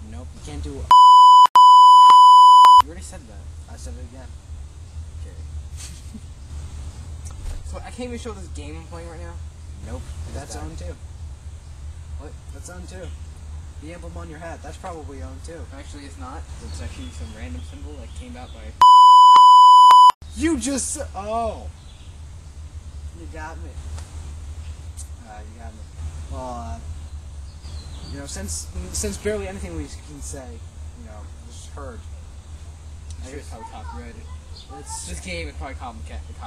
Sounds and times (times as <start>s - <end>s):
Conversation: 0.0s - 36.4s.